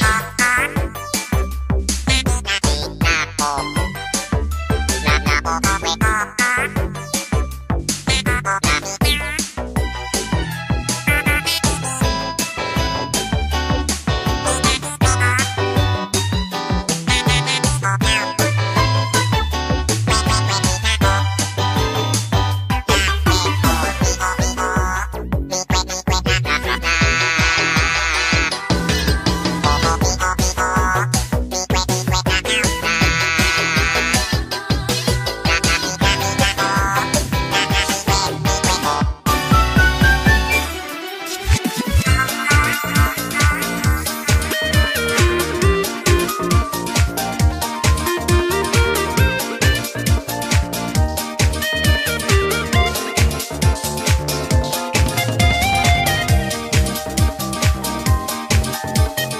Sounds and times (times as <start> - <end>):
Music: 0.0 - 59.3.